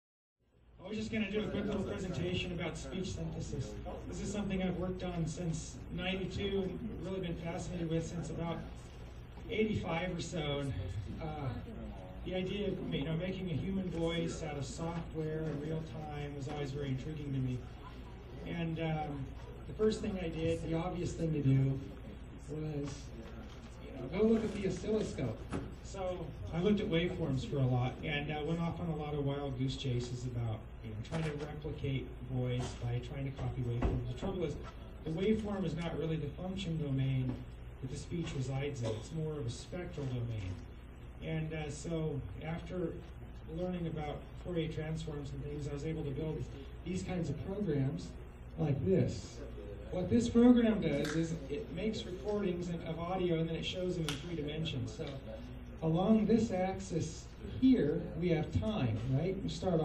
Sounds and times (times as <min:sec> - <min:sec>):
Male speech, man speaking: 0:00.8 - 0:59.8.